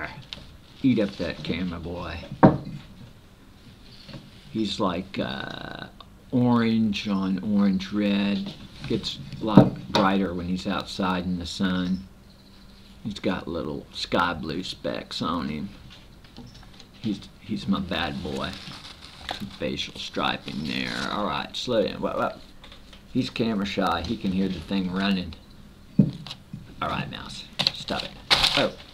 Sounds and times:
Speech: 0:00.8 - 0:02.3, 0:04.5 - 0:12.1, 0:13.0 - 0:15.8, 0:17.0 - 0:18.7, 0:19.5 - 0:22.4, 0:23.1 - 0:25.4, 0:26.8 - 0:28.8.

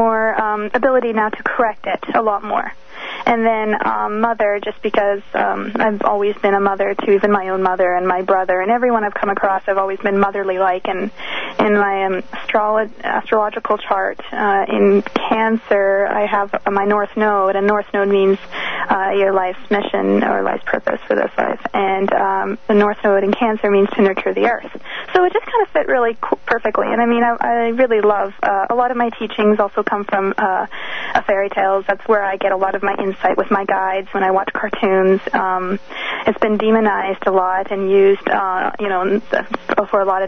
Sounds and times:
Radio: 0:00.0 - 0:40.2
Speech: 0:00.0 - 0:40.2.

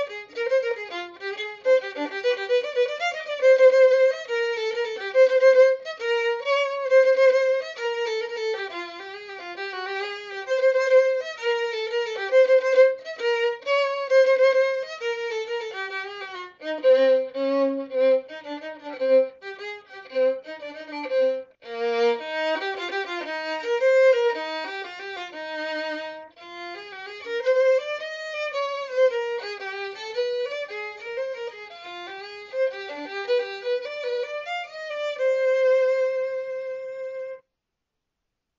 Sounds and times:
Violin, fiddle: 0:00.0 - 0:37.4.

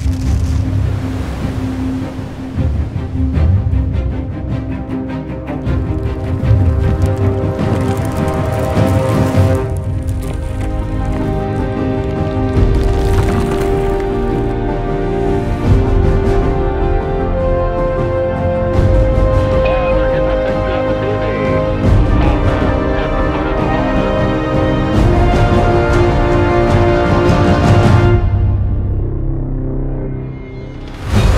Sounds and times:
Music: 0:00.0 - 0:31.3.

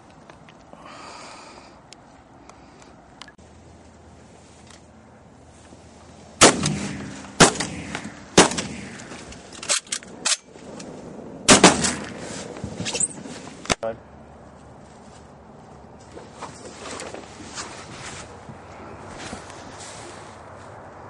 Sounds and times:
Speech: 0:13.8 - 0:14.0.

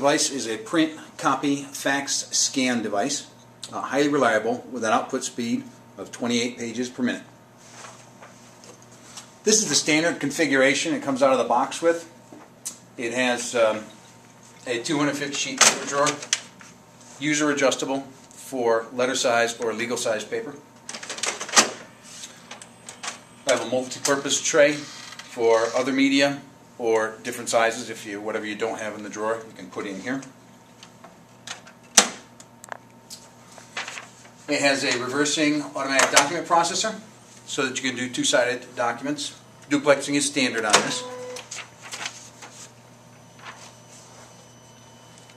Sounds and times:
Speech: 0:00.0 - 0:07.4, 0:09.4 - 0:12.2, 0:13.0 - 0:13.9, 0:14.6 - 0:16.2, 0:17.2 - 0:20.7, 0:23.4 - 0:30.4, 0:34.5 - 0:41.1.

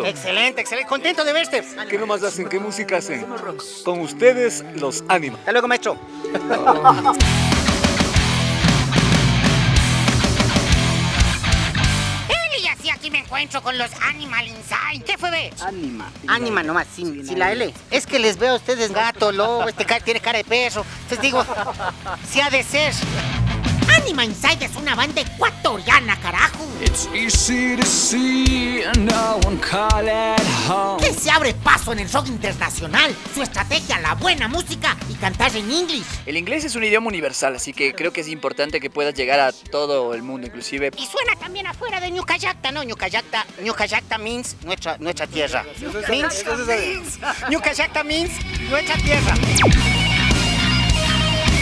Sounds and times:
Music: 0:00.0 - 0:51.6
Speech: 0:30.9 - 0:49.4.

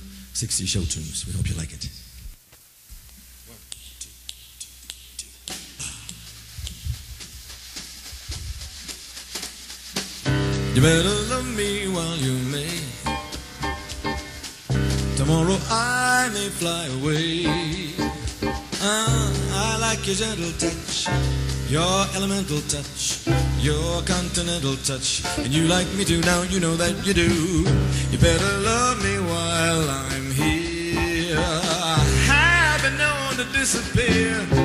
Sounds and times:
Jazz: 0:00.0 - 0:34.6
Singing: 0:10.8 - 0:13.2, 0:15.2 - 0:34.6.

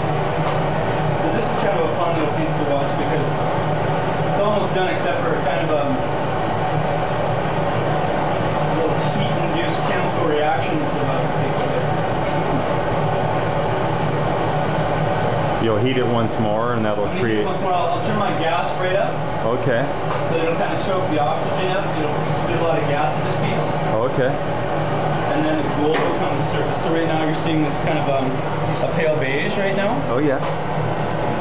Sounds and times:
Speech: 0:01.2 - 0:03.4, 0:04.4 - 0:06.1, 0:08.8 - 0:12.6, 0:15.6 - 0:24.4, 0:25.3 - 0:30.5.

